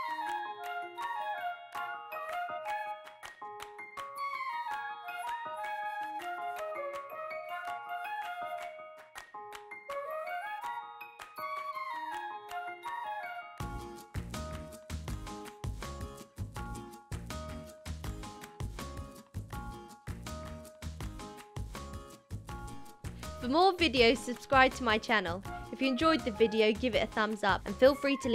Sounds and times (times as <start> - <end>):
Music: 0.0 - 28.3.